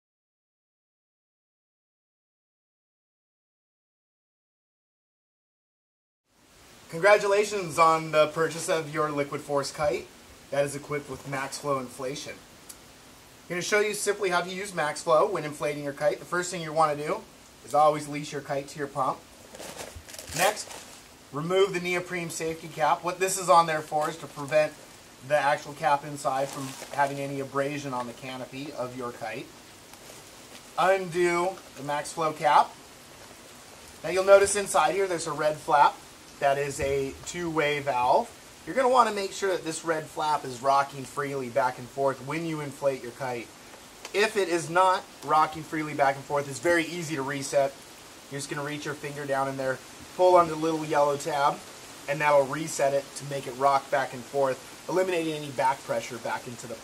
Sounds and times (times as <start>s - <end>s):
Speech: 6.9s - 12.4s, 13.5s - 19.2s, 20.3s - 20.7s, 21.3s - 29.5s, 30.8s - 32.8s, 34.0s - 43.5s, 44.1s - 56.8s
Squish: 19.4s - 21.2s, 22.7s - 32.0s.